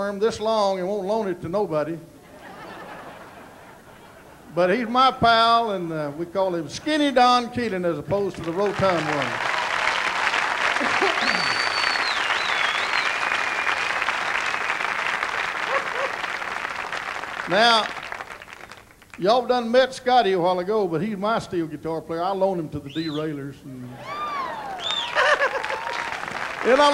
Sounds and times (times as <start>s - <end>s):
Speech: 0.0s - 2.0s, 4.5s - 9.3s, 19.2s - 24.0s, 26.7s - 26.9s.